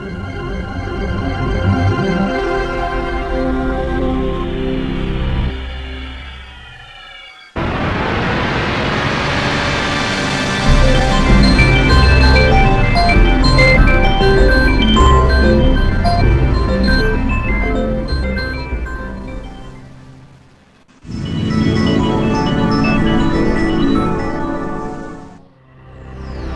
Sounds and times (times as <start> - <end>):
Music: 0.0 - 7.6, 9.9 - 26.5.